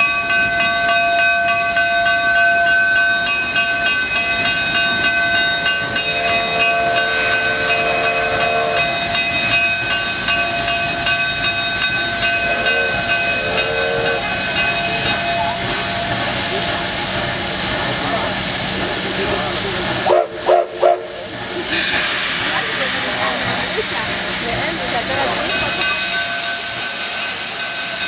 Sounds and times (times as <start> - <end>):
Steam whistle: 5.8 - 9.3, 12.3 - 14.6, 20.1 - 21.2
Hiss: 12.3 - 28.0.